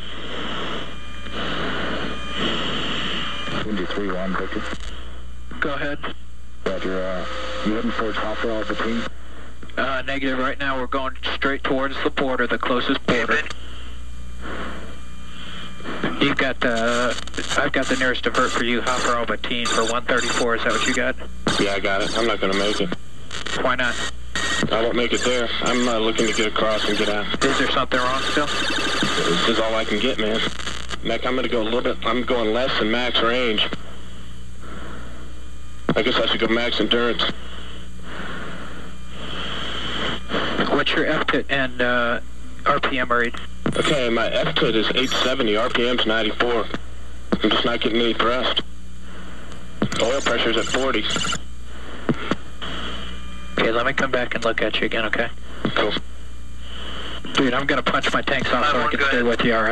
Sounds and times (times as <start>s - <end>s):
Speech: 3.6s - 4.7s, 5.5s - 9.1s, 9.8s - 13.6s, 16.1s - 23.0s, 23.6s - 24.0s, 24.7s - 28.6s, 29.2s - 33.8s, 35.9s - 37.4s, 40.6s - 46.8s, 47.4s - 48.7s, 50.0s - 51.3s, 53.6s - 56.1s, 57.3s - 59.7s.